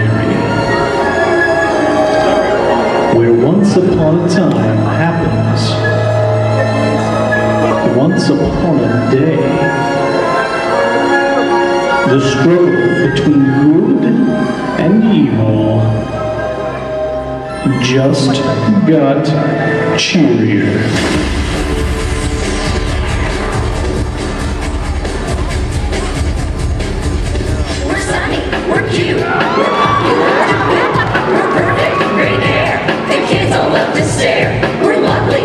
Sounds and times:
Music: 0.0s - 35.4s
Speech: 17.7s - 19.4s.

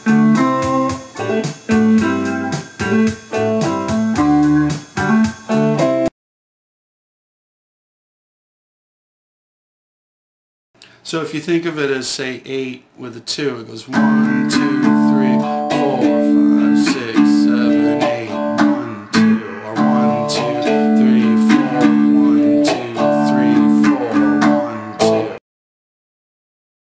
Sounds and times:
Electric guitar: 0.0s - 6.1s, 14.0s - 25.4s
Speech: 11.0s - 16.1s
Strum: 14.0s - 25.4s.

